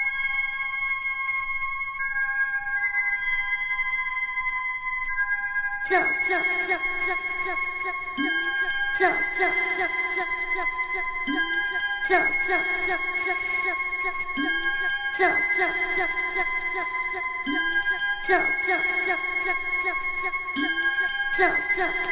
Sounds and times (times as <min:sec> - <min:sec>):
Music: 0:00.0 - 0:22.1.